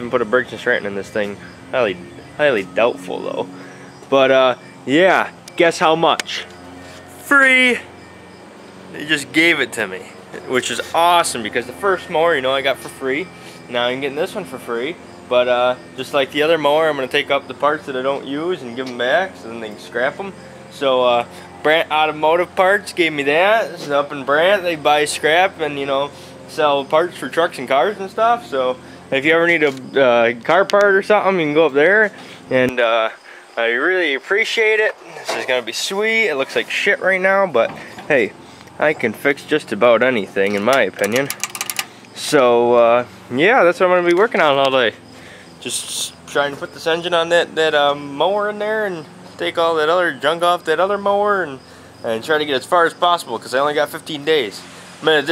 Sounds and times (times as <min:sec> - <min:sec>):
Speech: 0:00.0 - 0:03.5, 0:04.1 - 0:06.5, 0:07.2 - 0:07.9, 0:09.0 - 0:41.3, 0:42.2 - 0:45.0, 0:45.6 - 0:55.3.